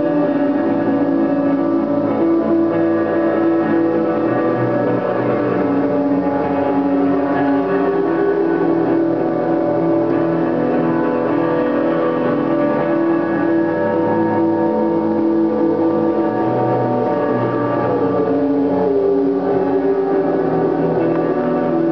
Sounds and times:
Music: 0.0s - 21.9s.

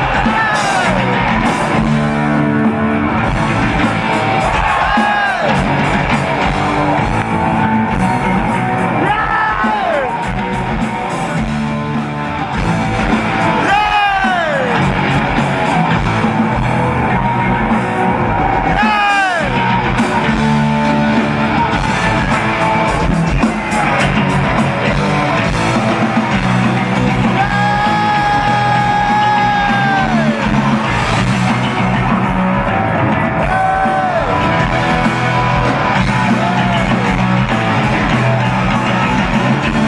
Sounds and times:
Music: 0.0s - 39.8s.

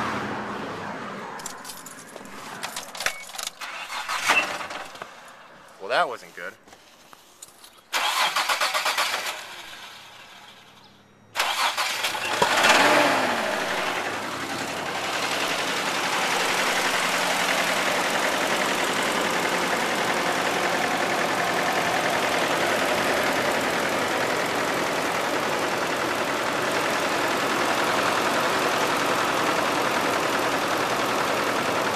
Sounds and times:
Engine: 0.0s - 5.7s, 7.4s - 31.9s
Car: 0.0s - 5.8s, 6.7s - 31.9s
Speech: 5.8s - 6.6s.

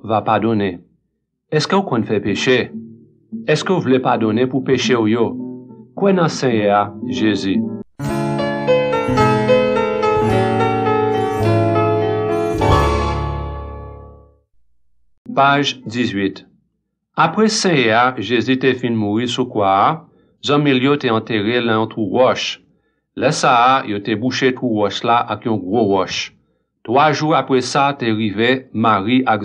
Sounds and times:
Speech: 0.0s - 0.9s, 1.5s - 2.8s, 3.4s - 5.4s, 6.0s - 7.7s, 15.3s - 16.5s, 17.2s - 22.6s, 23.2s - 29.4s
Music: 2.0s - 14.5s.

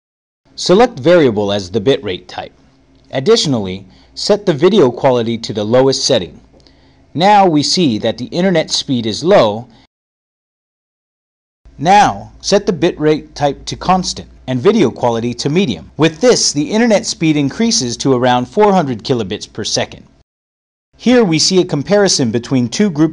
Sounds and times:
Speech: 0.6s - 2.5s, 3.1s - 6.4s, 7.2s - 9.7s, 11.8s - 20.1s, 21.0s - 23.1s.

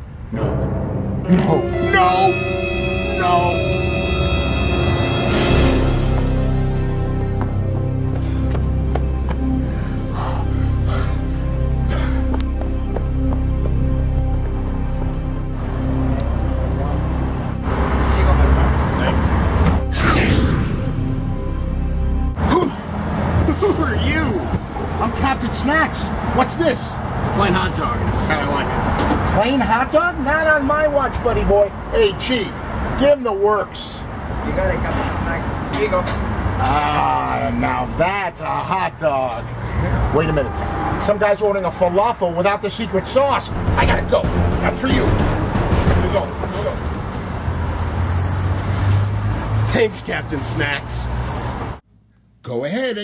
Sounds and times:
Speech: 29.3s - 45.2s, 49.7s - 51.1s, 52.5s - 53.0s.

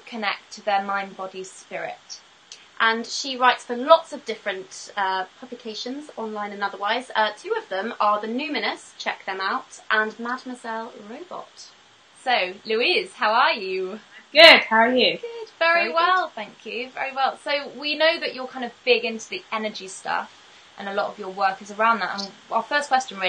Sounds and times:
Speech: 0.0s - 2.2s, 2.8s - 23.2s.

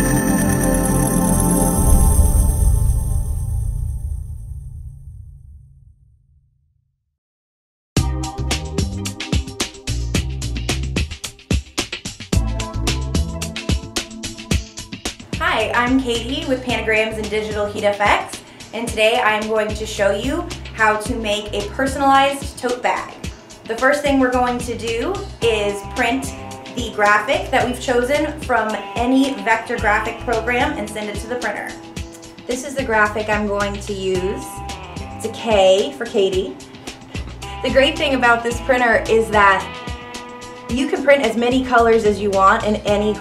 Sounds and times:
Music: 0.0s - 5.7s, 8.0s - 43.2s
Speech: 15.4s - 31.8s, 32.5s - 34.6s, 35.2s - 36.6s, 37.6s - 39.7s, 40.7s - 43.2s.

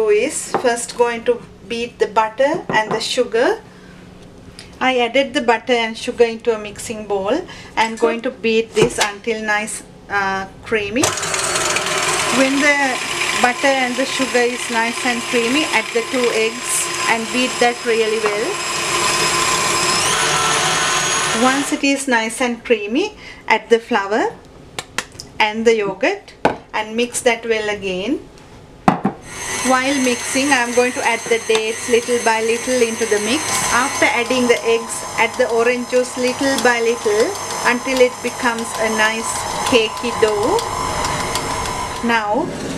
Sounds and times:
Speech: 0.0s - 3.6s, 4.8s - 11.1s, 12.3s - 18.6s, 21.4s - 24.4s, 25.4s - 28.3s, 29.6s - 40.6s, 42.0s - 42.5s.

